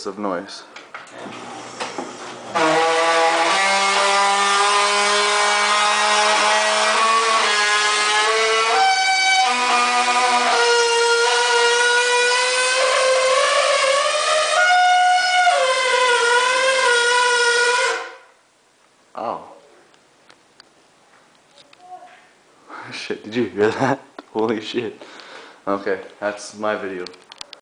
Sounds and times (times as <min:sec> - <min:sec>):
Speech: 0:00.0 - 0:00.7, 0:19.2 - 0:19.7, 0:22.9 - 0:25.0, 0:25.7 - 0:27.2.